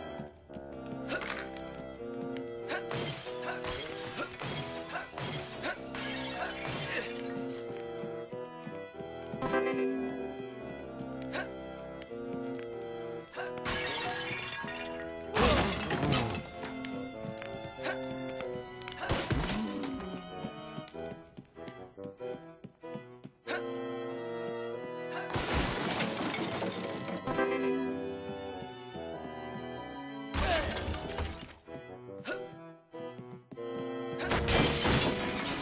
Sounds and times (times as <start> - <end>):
Music: 0.0 - 35.6
Smash, crash: 15.4 - 16.4, 19.0 - 19.8, 25.3 - 27.4, 34.3 - 35.6.